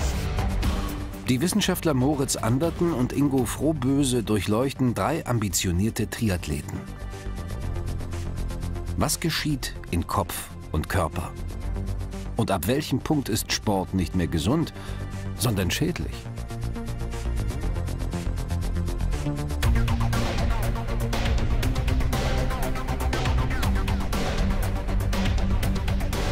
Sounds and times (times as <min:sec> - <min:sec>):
Music: 0:00.0 - 0:26.3
Speech: 0:01.3 - 0:06.8, 0:09.0 - 0:11.4, 0:12.4 - 0:14.8, 0:15.4 - 0:16.2.